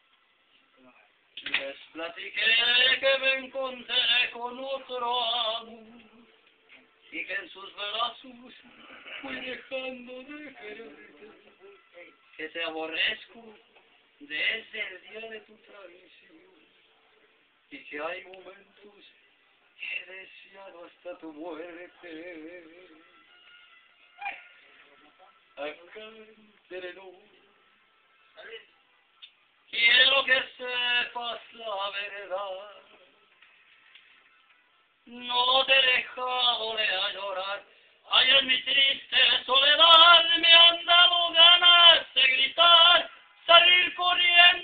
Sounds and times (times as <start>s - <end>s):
Male singing: 1.4s - 16.8s, 17.7s - 19.2s, 19.8s - 23.5s, 25.0s - 27.7s, 29.7s - 33.3s, 35.0s - 44.6s.